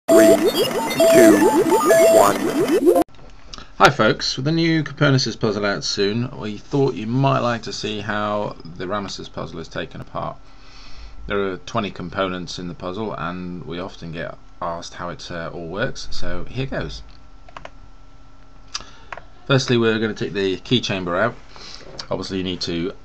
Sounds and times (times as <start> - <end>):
Music: 0.1 - 3.0
Speech: 3.8 - 10.4, 11.3 - 17.1, 19.4 - 21.4, 22.0 - 23.0.